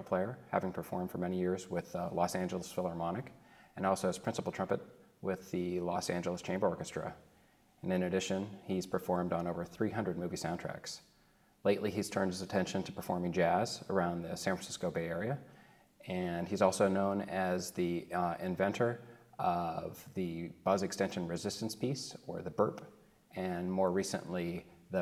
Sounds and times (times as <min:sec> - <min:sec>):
Speech: 0:00.0 - 0:07.2, 0:07.8 - 0:25.0.